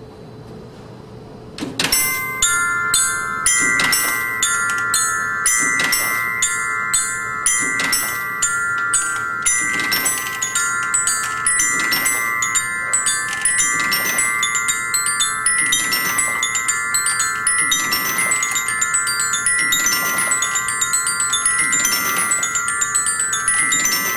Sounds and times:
Musical instrument: 2.0s - 24.1s.

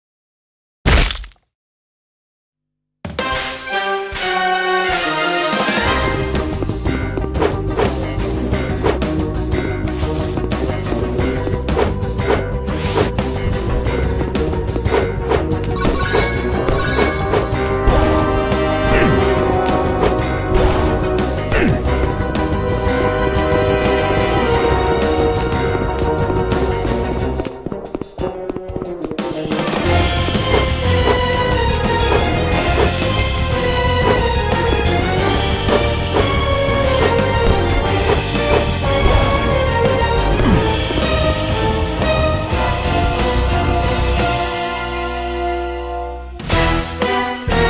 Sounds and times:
Music: 3.0s - 47.6s.

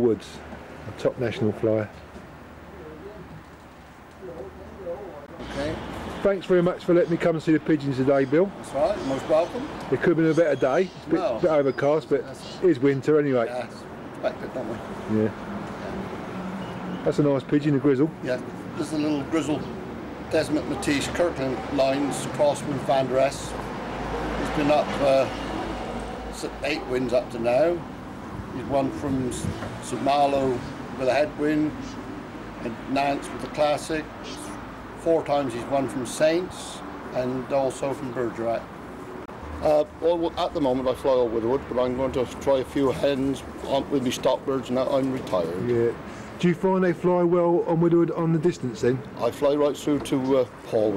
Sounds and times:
Speech: 0.0s - 2.0s, 4.2s - 15.4s, 20.3s - 23.6s, 24.4s - 25.3s, 26.4s - 27.8s, 28.6s - 31.8s, 32.6s - 38.7s, 39.6s - 50.9s.

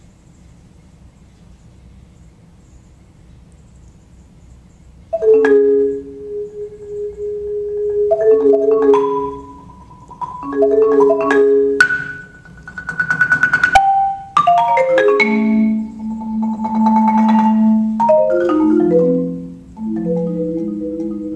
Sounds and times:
Music: 5.2s - 21.3s.

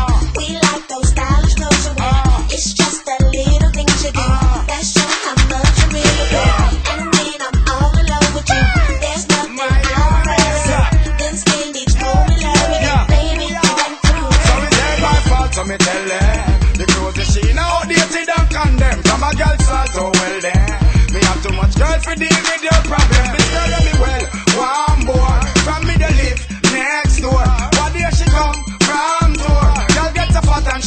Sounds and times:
Afrobeat: 0.0s - 30.8s.

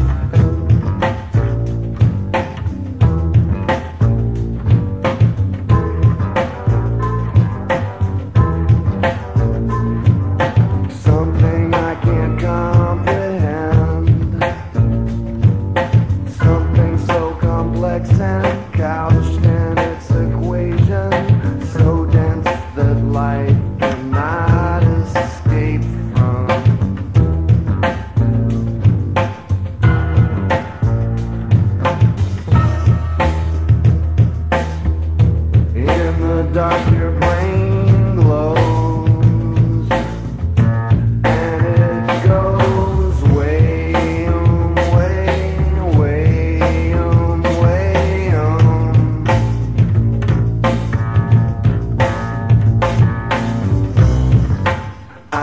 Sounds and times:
Music: 0.0s - 55.4s.

